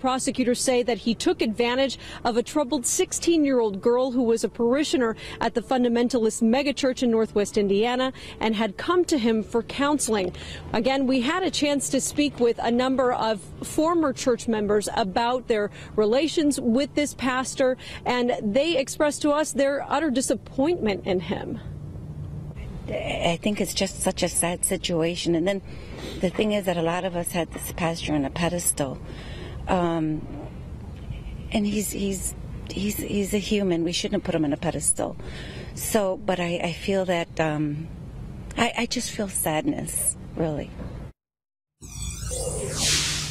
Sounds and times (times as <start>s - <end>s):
Speech: 0.0s - 21.6s, 22.9s - 25.6s, 26.2s - 29.0s, 29.7s - 30.4s, 31.5s - 35.2s, 35.8s - 37.9s, 38.6s - 40.8s
Outside, urban or manmade: 0.0s - 43.3s.